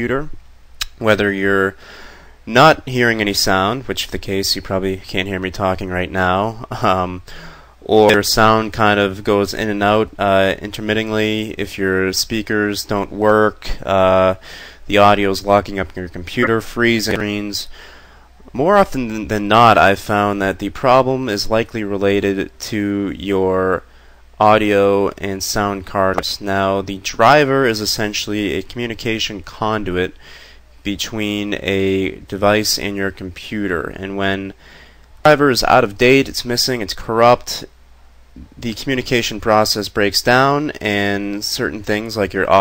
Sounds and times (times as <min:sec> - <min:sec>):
Speech: 0:00.0 - 0:01.8, 0:02.5 - 0:17.7, 0:18.5 - 0:30.2, 0:30.8 - 0:34.6, 0:35.2 - 0:37.7, 0:38.4 - 0:42.6.